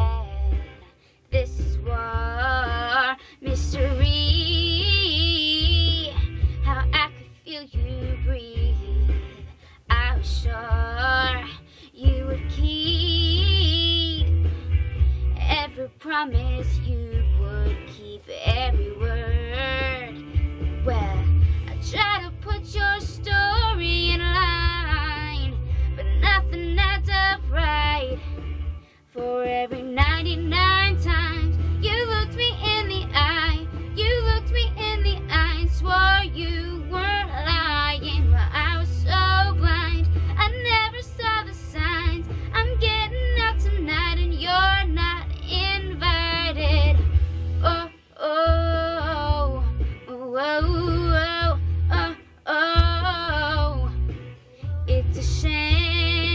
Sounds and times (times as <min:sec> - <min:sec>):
Female singing: 0:00.0 - 0:14.3, 0:15.4 - 0:20.2, 0:20.8 - 0:28.2, 0:29.1 - 0:47.0, 0:47.6 - 0:56.3
Music: 0:00.0 - 0:56.3.